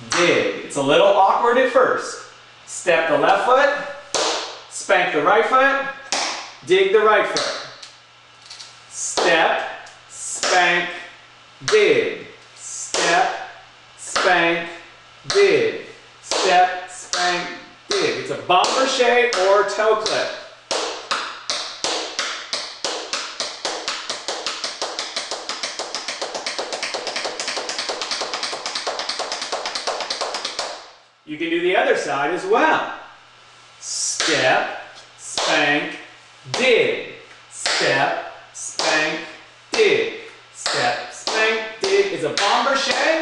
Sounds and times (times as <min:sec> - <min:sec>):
Speech: 0:00.1 - 0:04.0, 0:04.7 - 0:06.0, 0:06.6 - 0:07.7, 0:08.9 - 0:20.5, 0:31.3 - 0:33.0, 0:33.8 - 0:43.2.